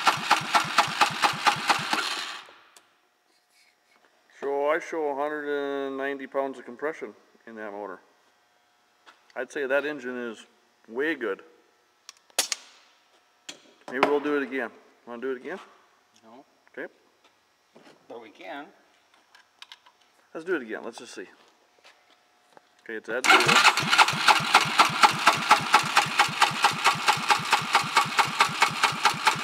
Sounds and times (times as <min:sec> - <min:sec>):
Speech: 0:04.4 - 0:08.1, 0:09.3 - 0:11.5, 0:13.9 - 0:17.0, 0:18.1 - 0:18.8, 0:20.3 - 0:21.4, 0:22.8 - 0:23.5.